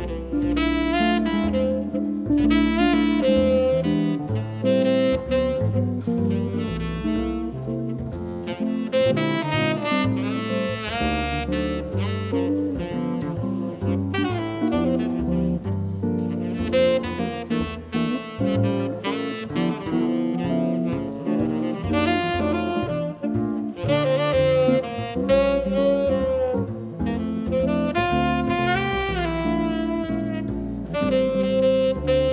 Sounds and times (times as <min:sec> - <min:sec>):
Jazz: 0:00.0 - 0:32.3.